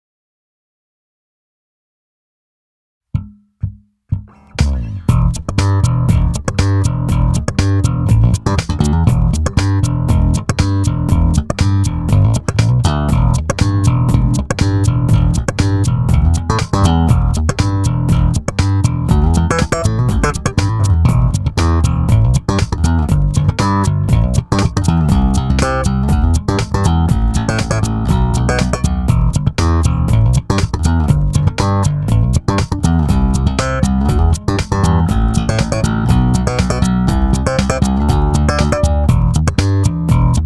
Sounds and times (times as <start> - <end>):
Guitar: 4.1 - 40.4.